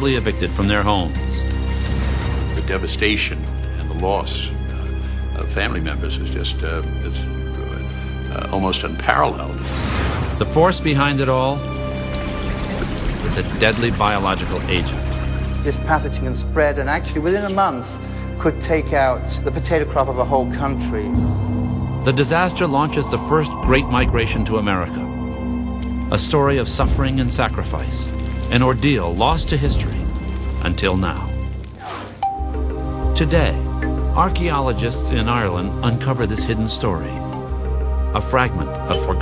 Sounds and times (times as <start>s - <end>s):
Speech: 0.0s - 1.4s, 2.6s - 4.5s, 5.4s - 9.6s, 13.3s - 15.0s, 22.1s - 25.1s, 26.1s - 30.0s, 30.6s - 31.3s, 34.2s - 37.2s, 38.2s - 39.2s
Music: 0.0s - 39.2s.